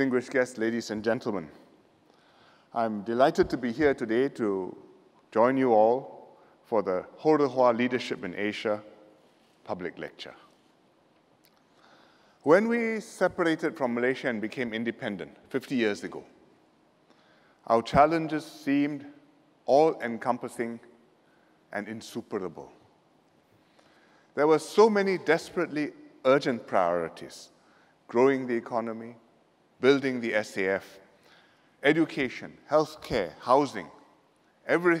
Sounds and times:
Male speech, man speaking: 0.0s - 1.6s, 2.8s - 8.9s, 9.6s - 10.5s, 12.4s - 16.3s, 17.7s - 20.9s, 21.7s - 22.8s, 24.4s - 27.5s, 28.1s - 29.2s, 29.8s - 31.0s, 31.8s - 34.0s, 34.7s - 35.0s
Narration, monologue: 0.0s - 35.0s.

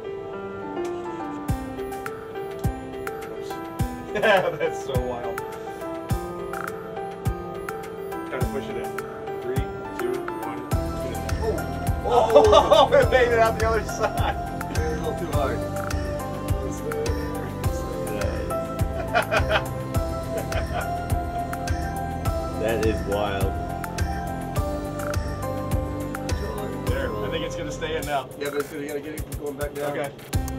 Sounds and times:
Music: 0.0s - 30.5s
Speech: 26.5s - 30.2s.

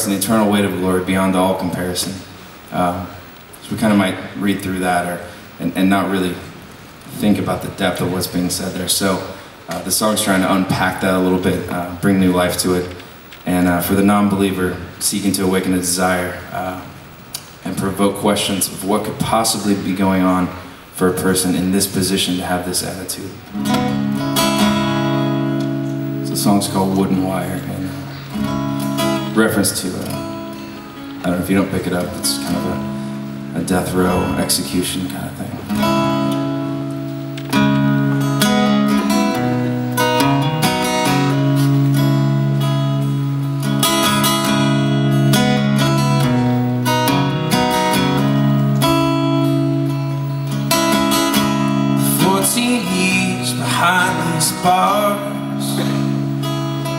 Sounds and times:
Speech: 0.0s - 6.5s, 7.1s - 17.0s, 17.6s - 23.4s, 26.2s - 28.1s, 29.3s - 30.2s, 31.2s - 32.8s, 33.5s - 35.7s, 52.1s - 56.0s
Music: 23.5s - 27.3s, 28.0s - 56.9s.

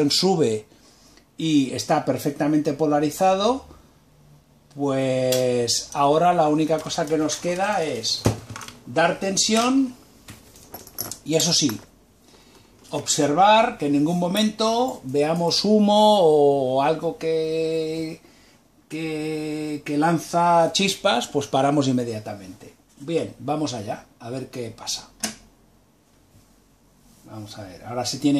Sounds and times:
Speech: 0.0s - 0.7s, 1.4s - 3.8s, 4.7s - 8.3s, 8.9s - 10.0s, 11.2s - 11.9s, 12.9s - 18.2s, 18.9s - 25.4s, 27.2s - 28.3s.

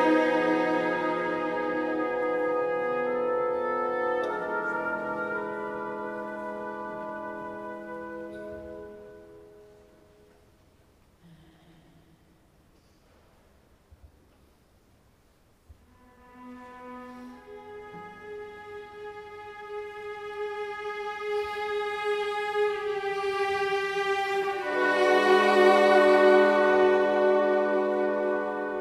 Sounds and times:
Orchestra: 0.0s - 11.2s, 15.5s - 28.8s.

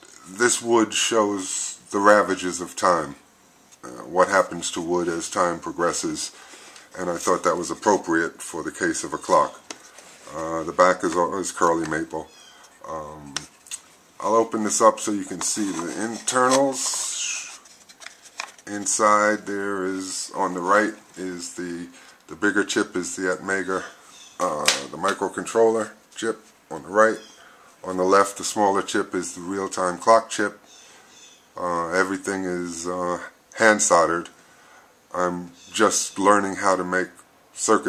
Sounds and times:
Speech: 0.2s - 3.2s, 3.8s - 13.5s, 14.2s - 17.6s, 18.6s - 30.6s, 31.6s - 34.4s, 35.1s - 37.8s.

